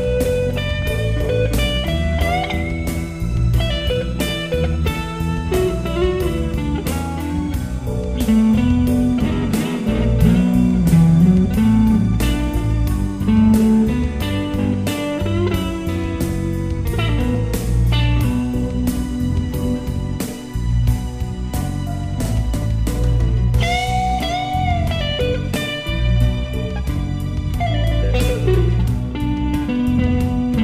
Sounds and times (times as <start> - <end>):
Guitar: 0.0 - 30.6.